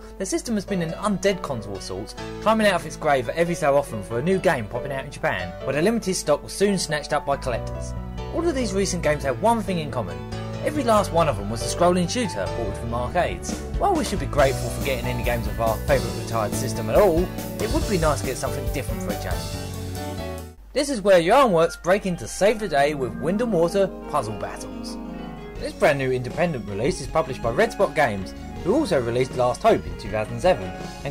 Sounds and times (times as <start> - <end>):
Music: 0.0 - 31.1
Speech: 0.2 - 19.5, 20.8 - 25.0, 25.6 - 31.1.